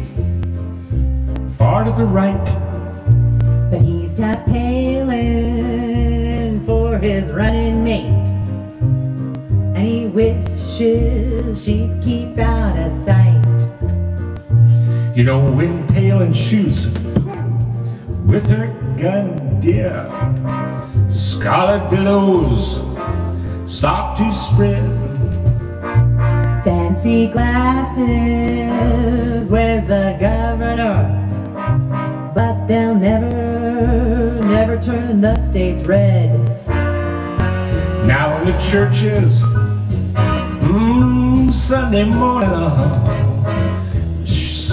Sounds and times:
Music: 0:00.0 - 0:44.7.

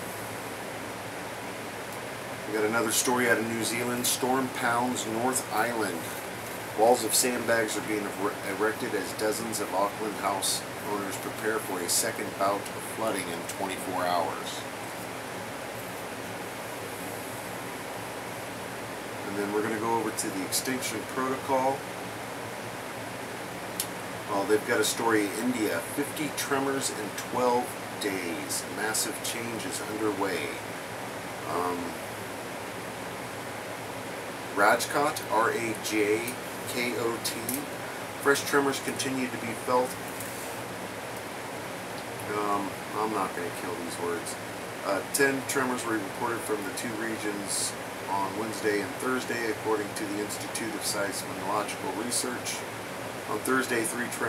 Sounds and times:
Inside, small room: 0:00.0 - 0:54.2
Speech: 0:02.5 - 0:06.2, 0:06.8 - 0:14.7, 0:19.2 - 0:21.8, 0:24.3 - 0:30.7, 0:31.4 - 0:32.0, 0:34.6 - 0:40.0, 0:42.2 - 0:52.7, 0:53.3 - 0:54.2.

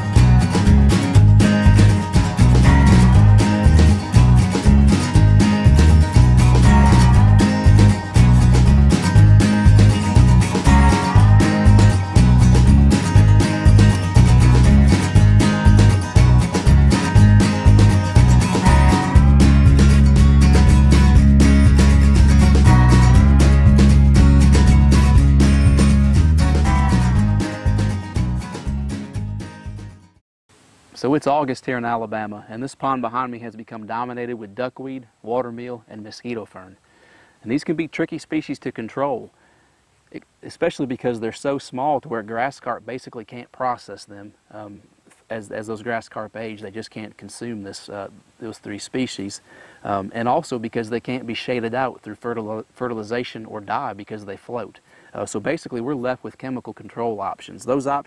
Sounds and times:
Music: 0:00.0 - 0:30.2
Speech: 0:31.0 - 0:36.8, 0:37.4 - 0:39.3, 0:40.1 - 0:58.0.

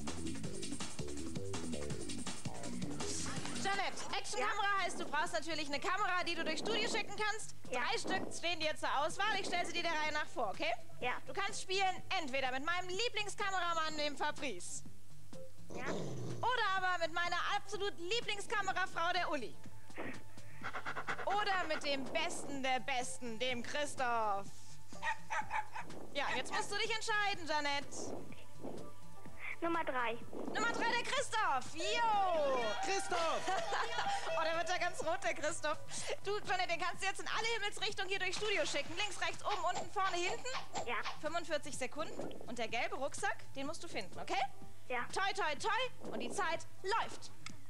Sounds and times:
Music: 0:00.0 - 0:47.7
Speech: 0:03.5 - 0:14.8, 0:15.8 - 0:19.6, 0:21.3 - 0:24.5, 0:26.2 - 0:28.1, 0:29.6 - 0:47.3.

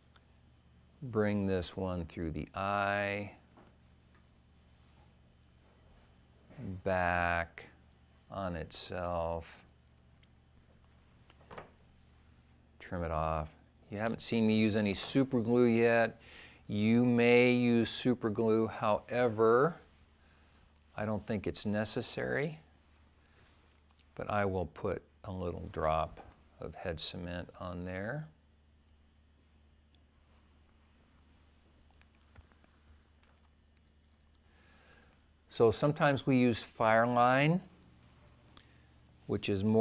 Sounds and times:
Speech: 0:01.0 - 0:03.5, 0:06.6 - 0:09.7, 0:12.8 - 0:19.9, 0:21.0 - 0:22.7, 0:24.2 - 0:28.4, 0:35.5 - 0:37.7, 0:39.3 - 0:39.8.

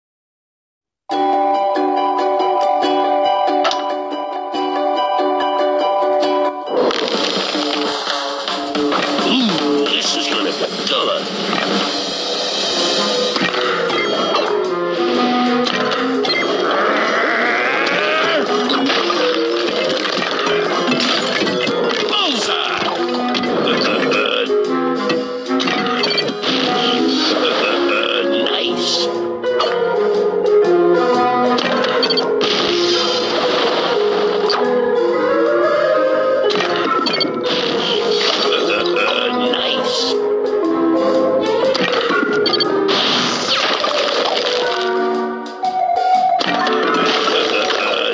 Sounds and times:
Music: 0:01.1 - 0:48.1
Speech: 0:09.3 - 0:11.3, 0:22.1 - 0:22.9, 0:23.6 - 0:24.5, 0:26.9 - 0:29.1, 0:38.4 - 0:40.2, 0:47.3 - 0:48.1.

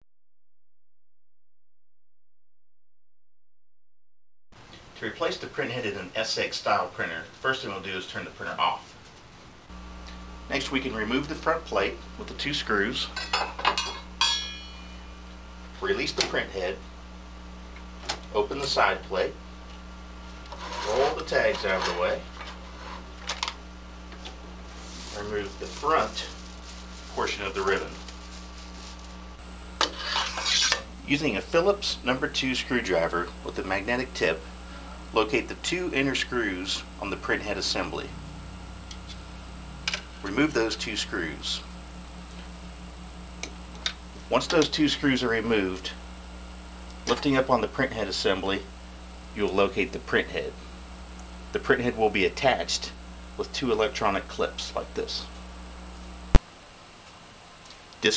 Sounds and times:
Speech: 0:05.0 - 0:08.9, 0:10.5 - 0:13.2, 0:15.8 - 0:16.8, 0:18.3 - 0:19.4, 0:20.7 - 0:22.3, 0:25.1 - 0:26.4, 0:27.1 - 0:28.0, 0:31.0 - 0:34.4, 0:35.1 - 0:38.2, 0:40.2 - 0:41.7, 0:44.3 - 0:46.0, 0:47.0 - 0:48.7, 0:49.3 - 0:50.6, 0:51.5 - 0:55.4.

